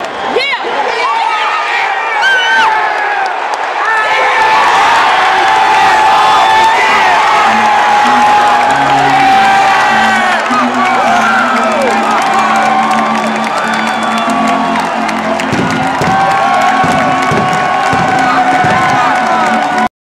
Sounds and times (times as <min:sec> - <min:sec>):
Music: 0:04.8 - 0:19.9.